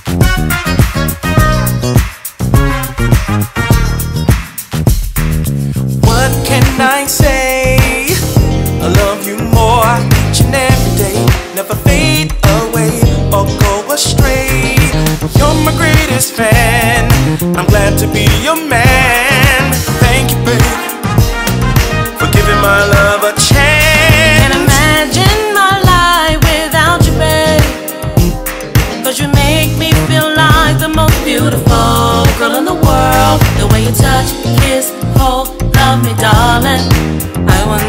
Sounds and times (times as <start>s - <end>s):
Dance music: 0.0s - 37.8s
Exciting music: 0.0s - 37.8s
Funk: 0.0s - 37.8s.